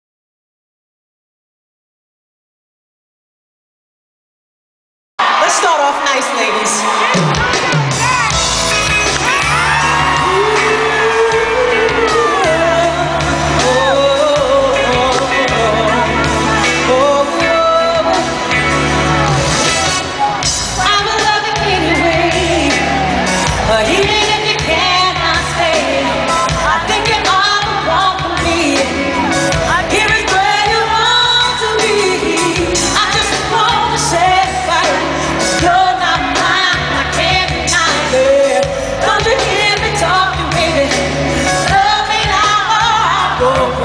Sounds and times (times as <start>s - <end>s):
Pop music: 5.2s - 43.8s
Speech: 5.4s - 7.2s
Singing: 9.4s - 18.7s.